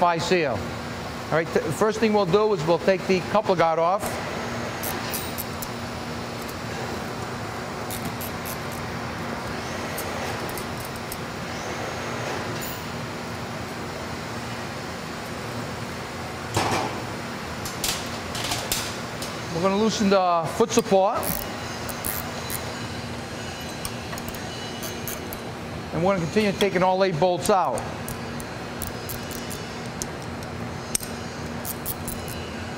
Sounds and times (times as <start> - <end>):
Speech: 0.0 - 0.6, 1.3 - 4.1, 19.5 - 21.3, 25.9 - 27.9
Tools: 7.9 - 8.7, 20.8 - 22.7, 23.6 - 25.4, 27.4 - 32.5.